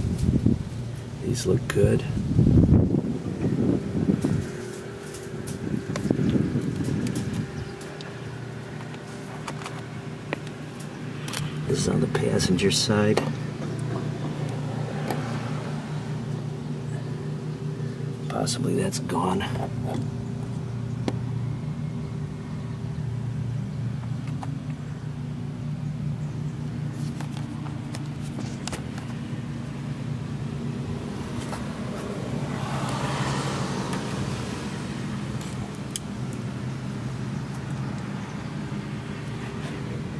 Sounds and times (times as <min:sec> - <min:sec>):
Speech: 0:01.2 - 0:02.2, 0:11.7 - 0:13.4, 0:18.3 - 0:20.0.